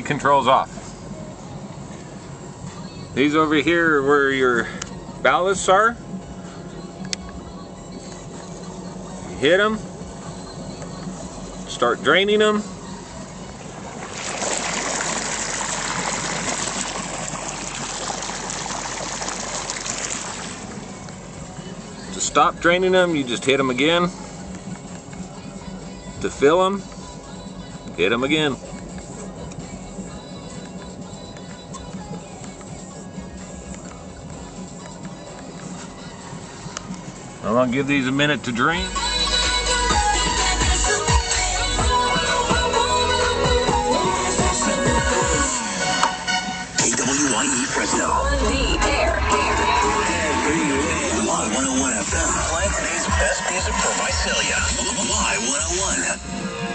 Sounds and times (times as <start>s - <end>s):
Music: 0.0s - 56.7s
Water: 13.5s - 22.0s.